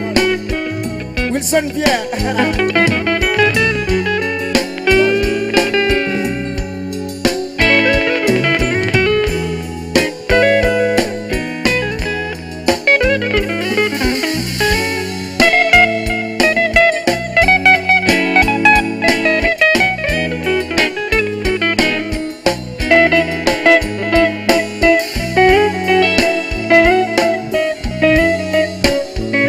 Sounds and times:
Music: 0:00.0 - 0:29.4.

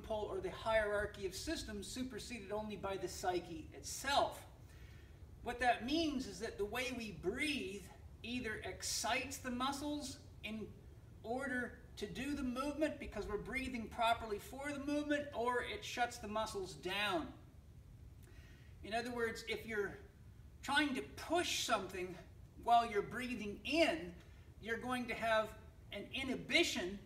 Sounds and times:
Speech: 0:00.0 - 0:04.5, 0:05.4 - 0:17.4, 0:18.8 - 0:27.0.

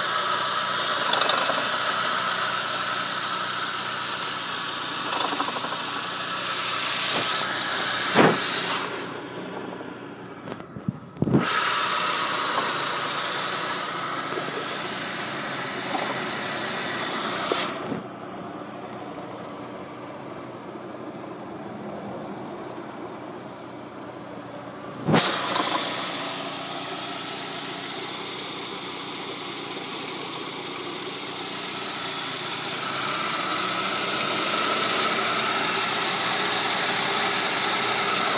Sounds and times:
Engine: 0:00.0 - 0:38.3.

